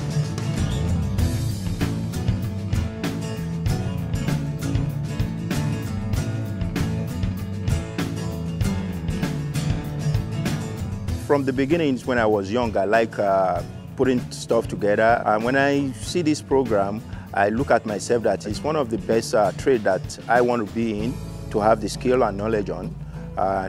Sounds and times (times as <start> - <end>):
Music: 0.0 - 23.6
Speech: 11.3 - 23.6.